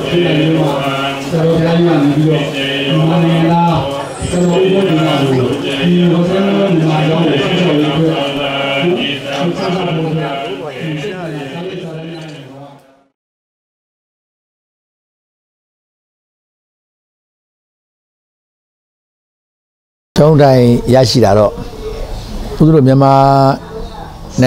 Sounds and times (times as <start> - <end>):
Male speech, man speaking: 0.0 - 12.8, 20.2 - 21.6, 22.6 - 23.6.